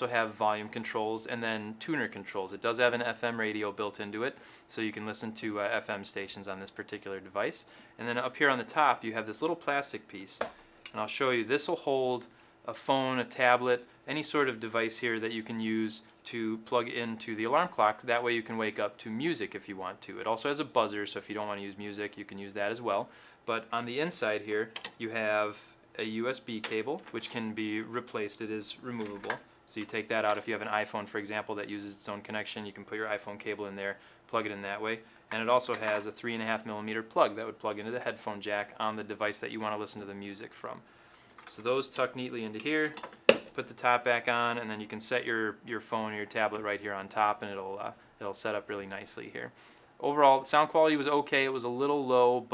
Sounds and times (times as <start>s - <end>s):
Speech: 0.0s - 52.5s.